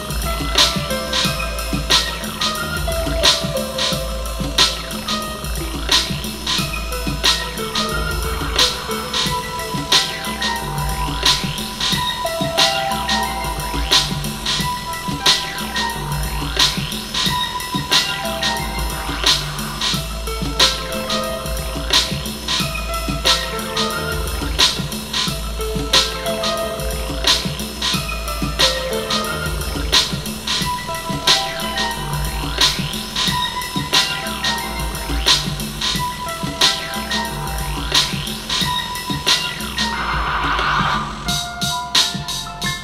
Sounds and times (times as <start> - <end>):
Music: 0.0 - 42.8.